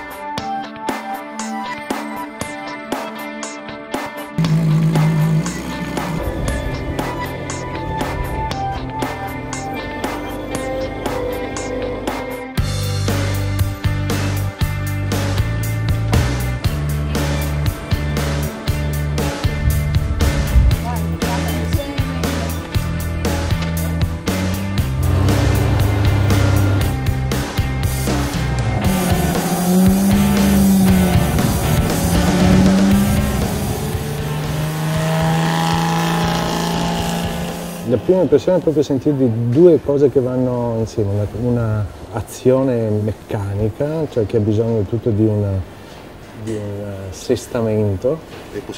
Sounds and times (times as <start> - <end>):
Music: 0.0 - 39.8
Medium engine (mid frequency): 4.4 - 13.4, 24.2 - 38.0.